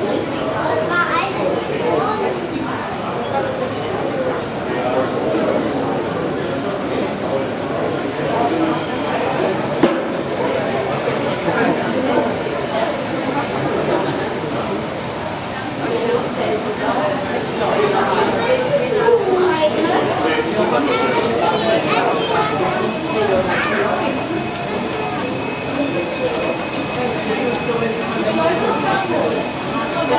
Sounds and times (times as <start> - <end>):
Speech: 0.0 - 30.1.